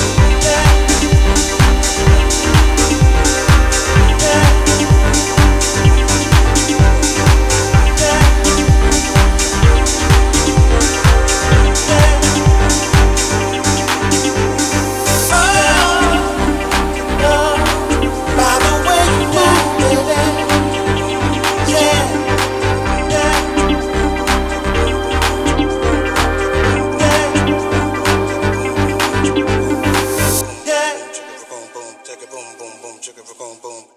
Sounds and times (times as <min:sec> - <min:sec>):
Funk: 0:00.0 - 0:30.4.